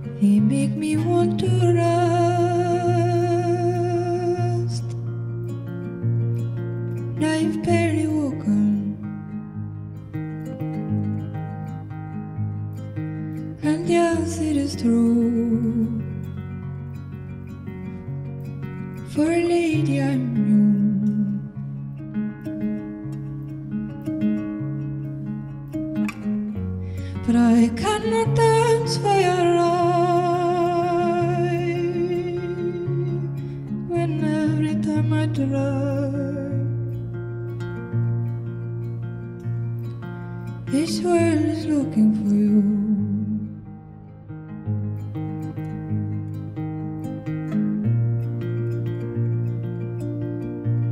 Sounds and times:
Music: 0.0 - 50.9.

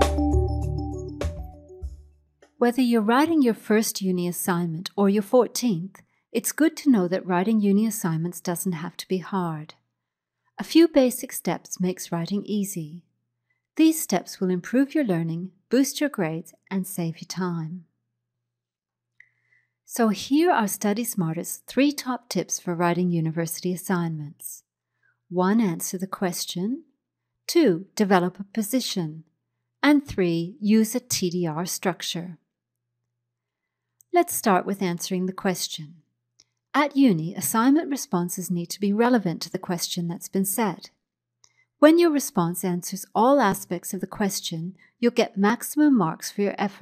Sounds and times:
Speech: 2.6 - 9.8, 10.6 - 13.1, 13.8 - 17.9, 19.9 - 24.7, 25.3 - 26.9, 27.5 - 32.4, 34.2 - 36.0, 36.8 - 40.9, 41.8 - 46.8.

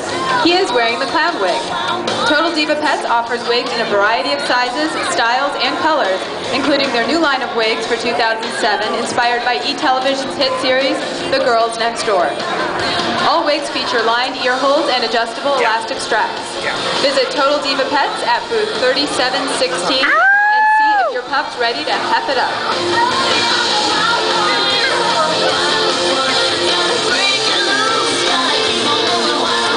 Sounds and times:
Music: 0.0 - 29.7
Speech: 2.3 - 12.4, 13.2 - 20.2.

